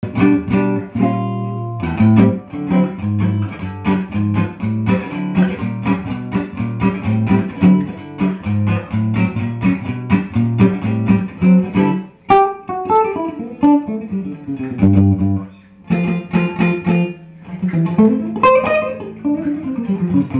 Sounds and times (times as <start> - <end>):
Acoustic guitar: 0.0 - 20.4
Electronic tuner: 0.0 - 20.4
Inside, small room: 0.0 - 20.4.